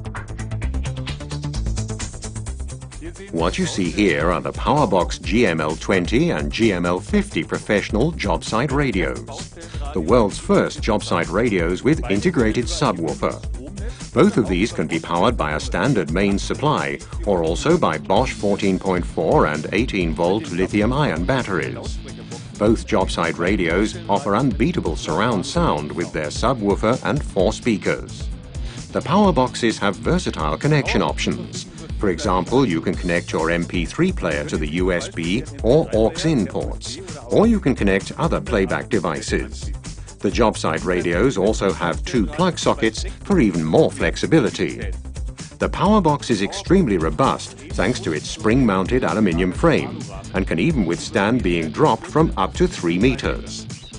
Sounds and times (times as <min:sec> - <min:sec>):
Music: 0:00.0 - 0:53.9
Speech: 0:03.0 - 0:28.3, 0:28.9 - 0:45.0, 0:45.6 - 0:53.8.